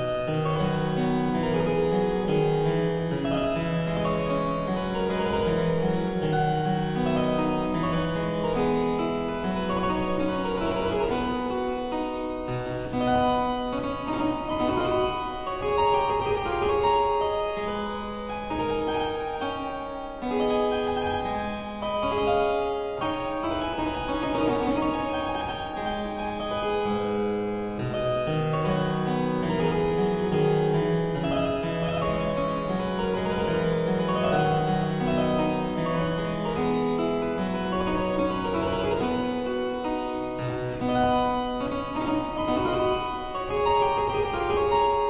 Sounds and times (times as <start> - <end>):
Harpsichord: 0.0 - 45.1.